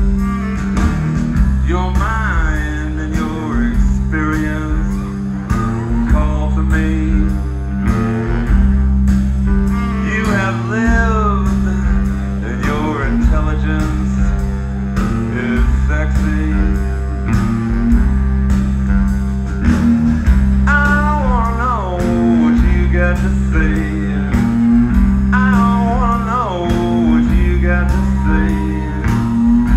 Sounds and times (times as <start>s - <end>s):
Music: 0.0s - 29.7s.